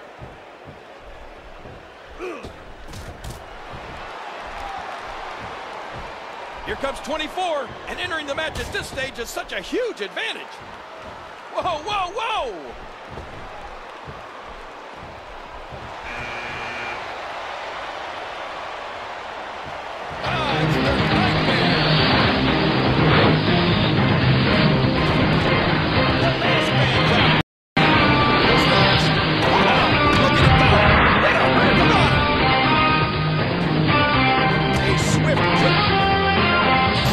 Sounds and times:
Music: 20.2s - 37.1s.

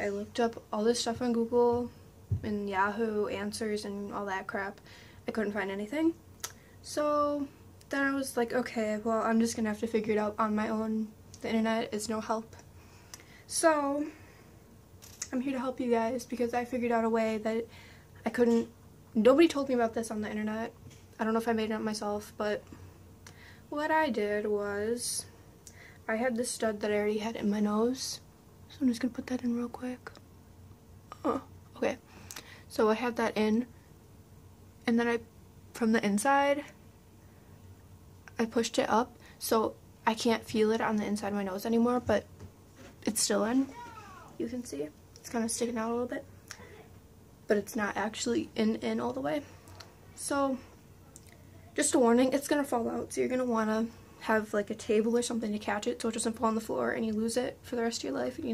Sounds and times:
Speech: 0.0s - 6.2s, 6.8s - 12.6s, 13.5s - 14.2s, 15.3s - 22.6s, 23.7s - 25.3s, 26.1s - 30.2s, 31.2s - 32.0s, 32.7s - 33.7s, 34.8s - 36.8s, 38.3s - 42.3s, 43.0s - 49.5s, 50.2s - 50.7s, 51.7s - 58.5s.

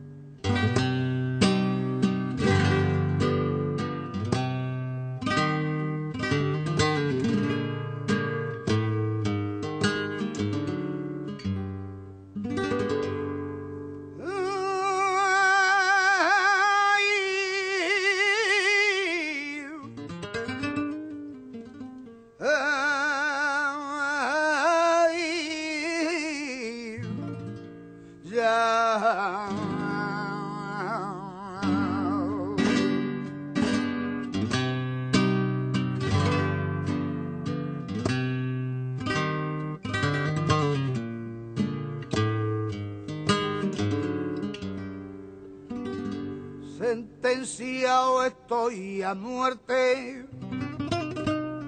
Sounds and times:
Strum: 0.0s - 51.6s.

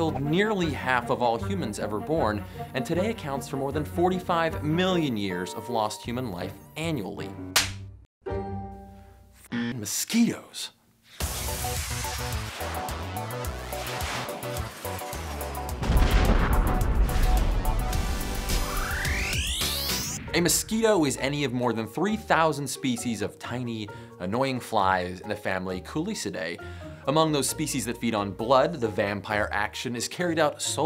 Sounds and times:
Speech: 0.0s - 7.3s, 9.7s - 10.8s, 20.3s - 30.8s
Music: 0.0s - 9.7s, 11.2s - 30.8s.

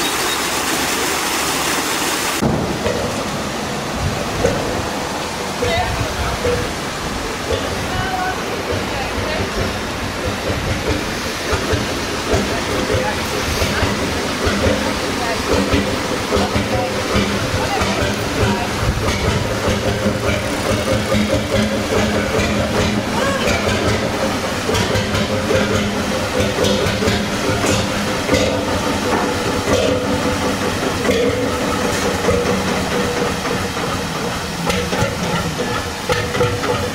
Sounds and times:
Boat, Water vehicle: 0.0s - 36.9s
Outside, rural or natural: 0.0s - 36.9s
Speech: 5.6s - 6.7s, 7.6s - 9.6s, 12.4s - 15.6s, 16.3s - 18.8s.

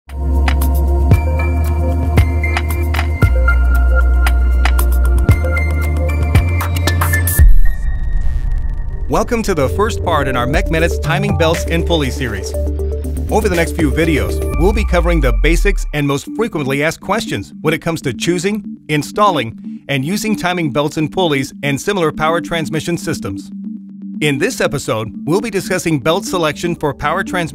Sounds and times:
Music: 0.1s - 27.5s
Speech: 9.1s - 12.6s, 13.3s - 23.5s, 24.2s - 27.5s.

